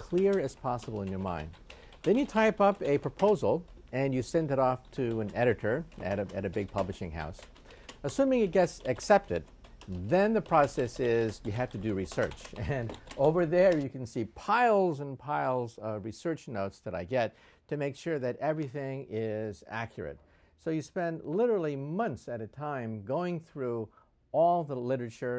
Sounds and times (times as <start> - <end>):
Speech: 0.0 - 7.4, 8.0 - 25.3.